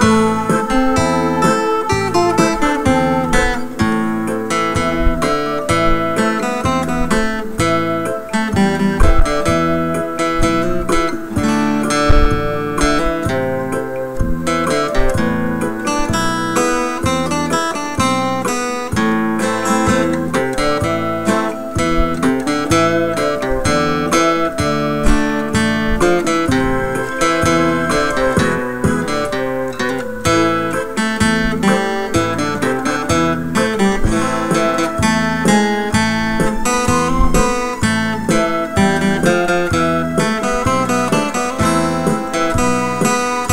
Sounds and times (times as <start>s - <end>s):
Music: 0.0s - 43.5s.